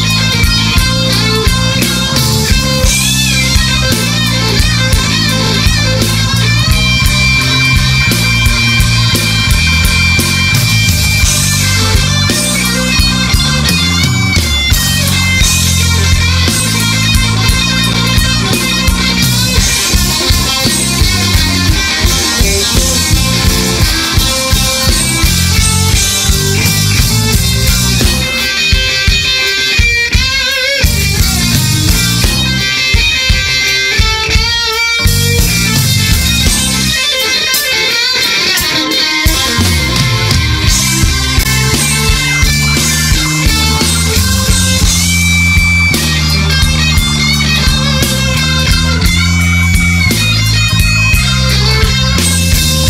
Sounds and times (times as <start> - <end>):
Tapping (guitar technique): 0.0 - 52.8.